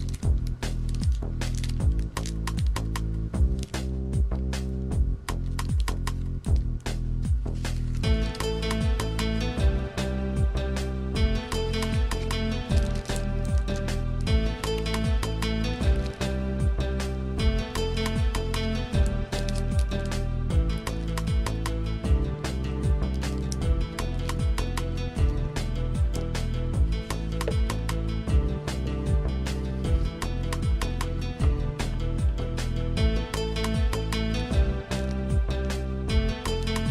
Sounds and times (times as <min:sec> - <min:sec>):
Music: 0:00.0 - 0:36.9.